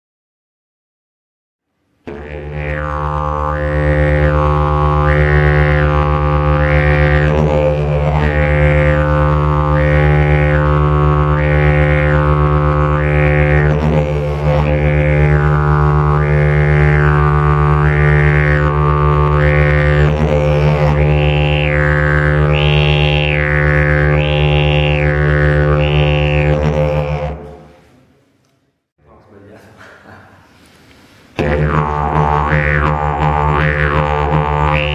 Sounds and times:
Music: 1.7s - 27.7s, 31.4s - 34.9s
Harmonic: 2.1s - 27.8s, 31.4s - 34.9s.

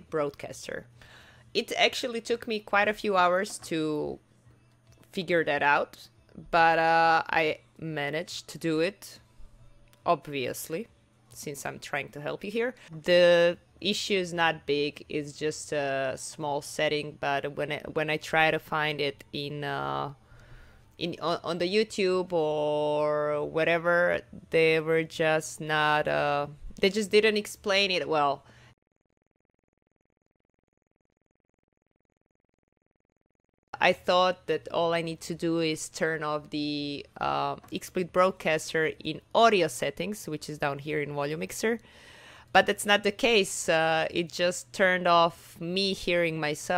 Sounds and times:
Speech: 0.0s - 0.9s, 1.6s - 4.2s, 5.0s - 9.2s, 10.0s - 20.2s, 21.0s - 28.4s, 33.8s - 41.8s, 42.5s - 46.7s.

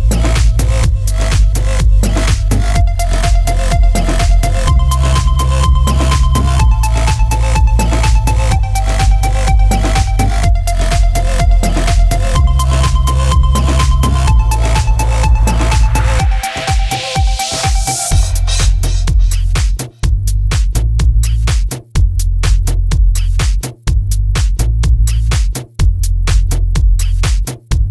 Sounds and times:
Music: 0.0s - 27.9s
Sound effect: 0.1s - 19.5s.

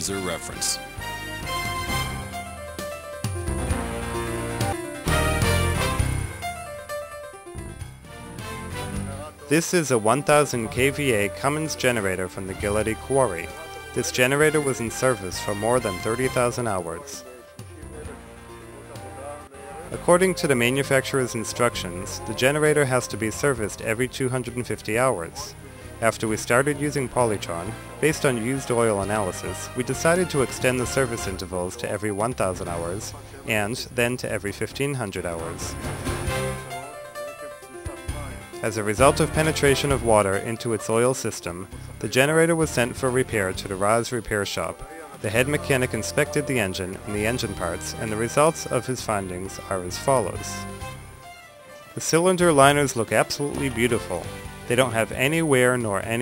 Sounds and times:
Speech: 0.0s - 0.8s, 9.0s - 35.8s, 37.8s - 50.7s, 52.0s - 56.2s
Music: 0.0s - 56.2s.

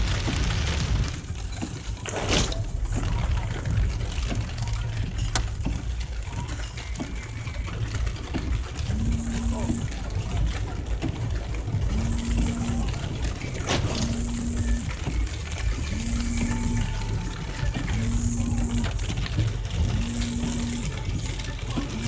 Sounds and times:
Rain: 0.0s - 22.0s
Music: 1.8s - 22.0s.

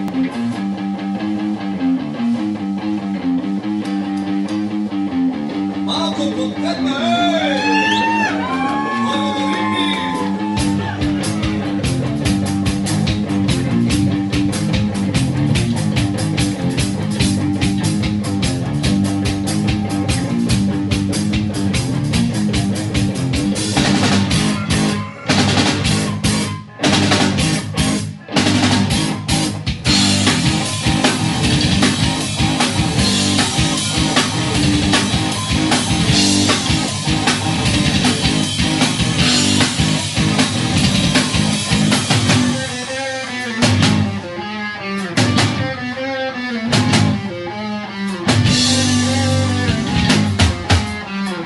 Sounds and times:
Heavy metal: 0.0s - 51.4s
Punk rock: 0.0s - 51.4s
Rock and roll: 0.0s - 51.4s.

